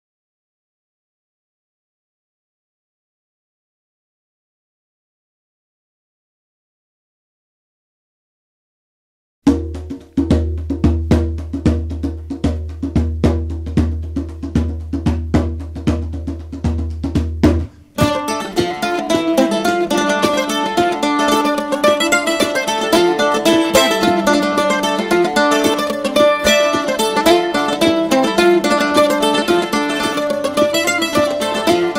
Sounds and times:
Music: 9.4 - 31.9.

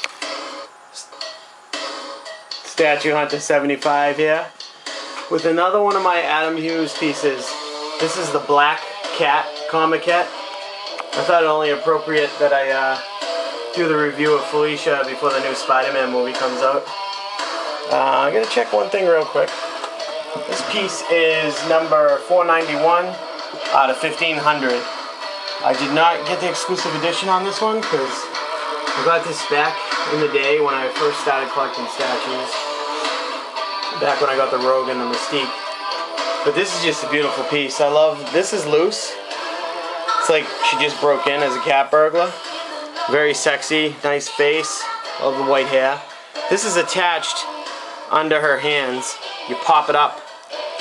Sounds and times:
Music: 0.0 - 50.8
Speech: 2.7 - 4.5, 5.3 - 10.3, 11.2 - 13.0, 13.8 - 16.8, 17.9 - 19.5, 20.4 - 24.9, 25.6 - 28.2, 29.0 - 32.6, 34.0 - 35.5, 36.5 - 39.2, 40.2 - 42.4, 43.1 - 47.5, 48.1 - 50.1.

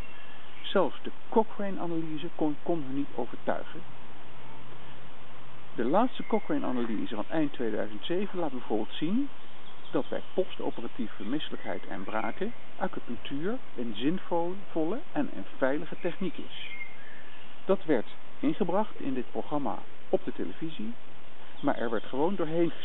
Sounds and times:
Speech: 0.6 - 3.8, 5.8 - 9.3, 9.9 - 16.7, 17.7 - 21.0, 21.6 - 22.8.

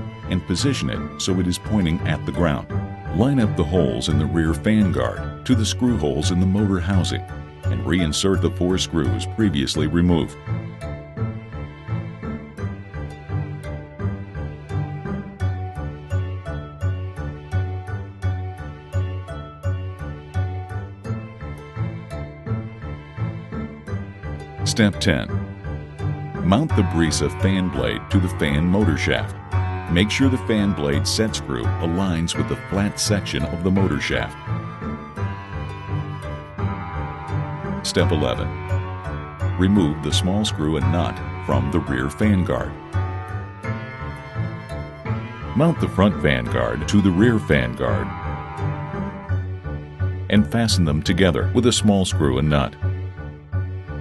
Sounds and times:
Music: 0.0 - 54.0
Speech: 0.3 - 10.4, 24.7 - 25.3, 26.4 - 29.3, 29.9 - 34.4, 37.9 - 38.5, 39.6 - 42.8, 45.6 - 48.1, 50.3 - 52.8.

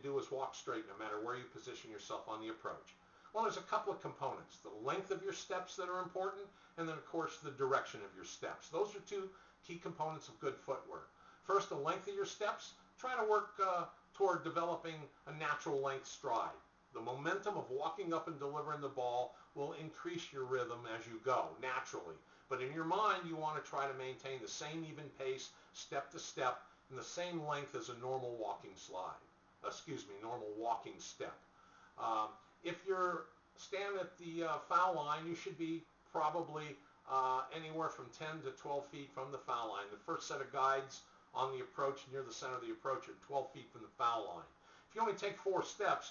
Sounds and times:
Speech: 0.0 - 46.1.

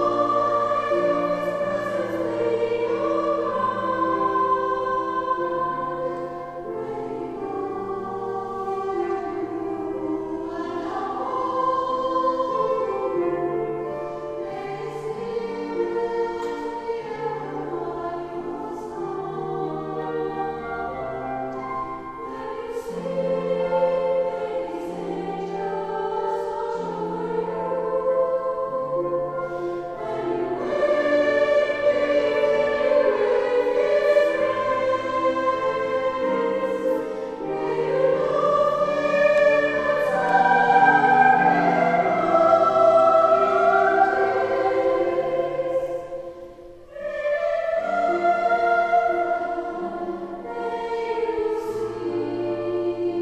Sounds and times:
Choir: 0.0 - 53.2.

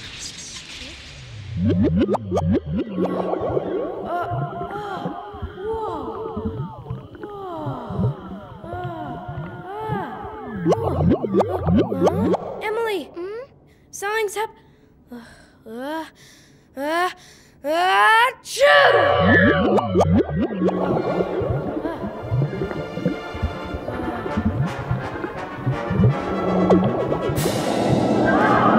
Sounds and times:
Boing: 1.6 - 7.3, 8.0 - 12.7, 19.1 - 28.7
Speech: 12.6 - 14.6.

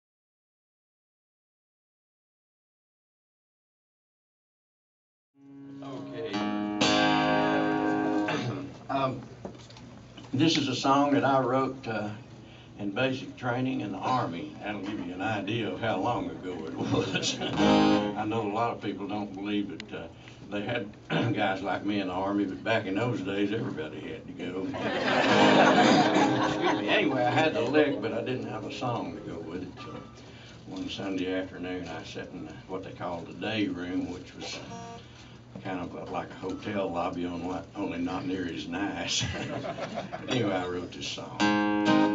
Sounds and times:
Speech: 8.9 - 9.2, 10.3 - 12.2, 12.8 - 24.8, 26.8 - 30.1, 30.7 - 34.8, 35.6 - 39.5, 40.2 - 41.4.

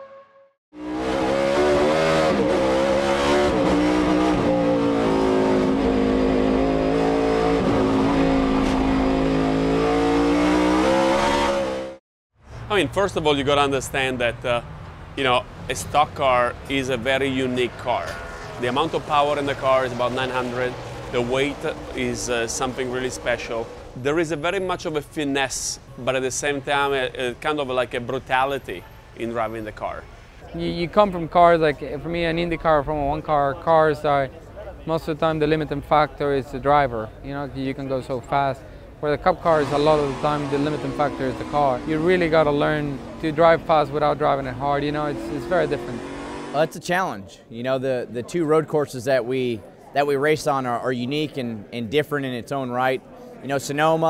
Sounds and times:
Motor vehicle (road): 0.8 - 54.1
Speech: 12.7 - 14.6, 15.2 - 46.0, 46.6 - 54.1.

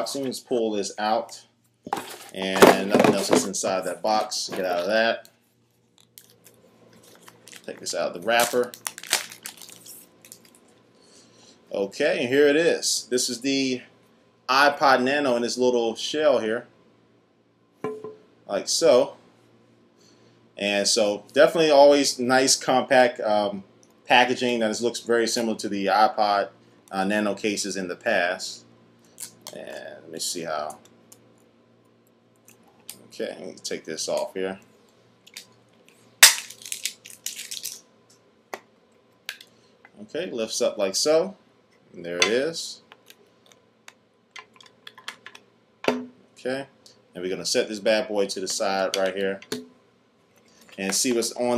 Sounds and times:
Speech: 0.0 - 1.5, 2.3 - 5.3, 7.7 - 8.8, 11.7 - 13.9, 14.5 - 16.7, 18.5 - 19.2, 20.6 - 28.6, 29.5 - 30.8, 33.0 - 34.6, 40.0 - 41.4, 42.0 - 42.9, 46.4 - 49.5, 50.8 - 51.5
Inside, small room: 0.0 - 51.5.

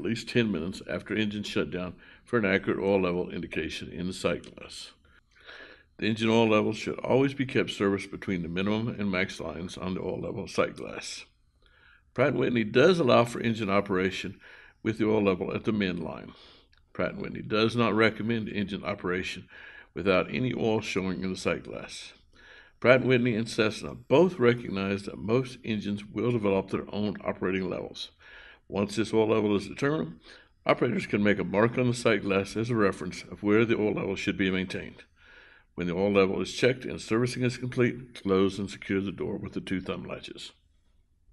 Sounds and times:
Speech: 0.0 - 5.0, 6.0 - 11.3, 12.2 - 35.2, 35.8 - 40.6.

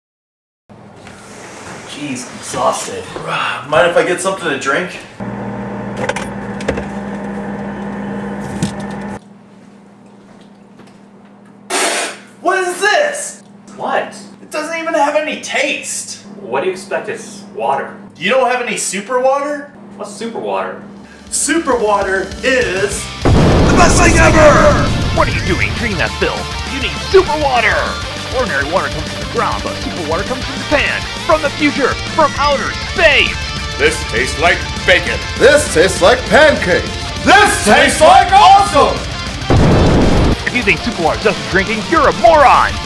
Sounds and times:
Speech: 1.9 - 5.1, 12.4 - 23.0, 23.8 - 39.0, 40.5 - 42.8
Music: 21.6 - 42.8.

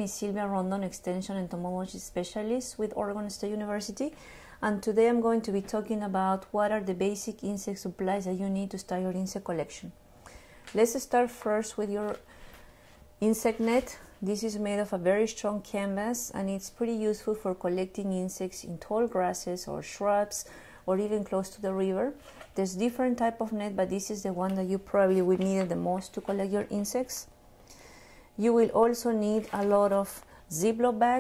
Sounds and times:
Speech: 0.0 - 10.0, 10.8 - 12.2, 13.2 - 27.3, 28.4 - 31.2.

